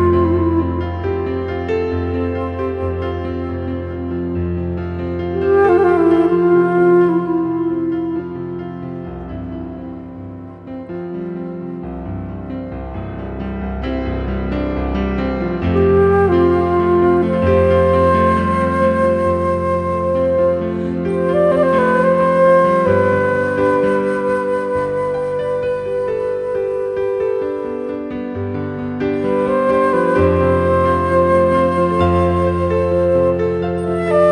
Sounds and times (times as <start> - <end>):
Music: 0.0 - 34.3.